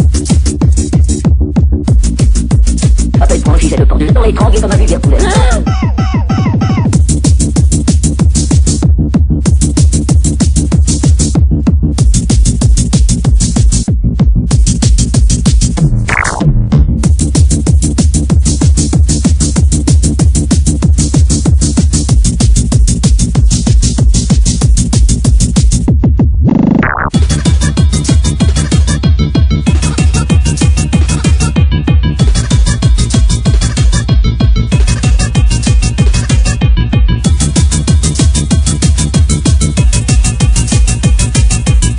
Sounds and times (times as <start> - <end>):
Music: 0.0 - 41.9.